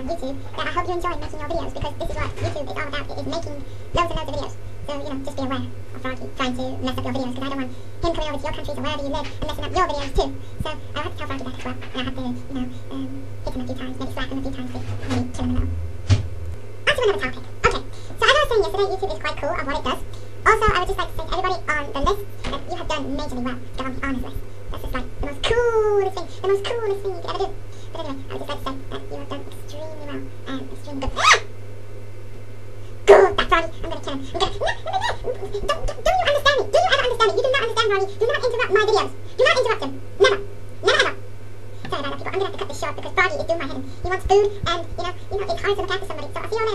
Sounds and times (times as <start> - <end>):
Speech: 0.0 - 15.8, 16.9 - 31.4, 33.1 - 41.2, 41.8 - 46.7.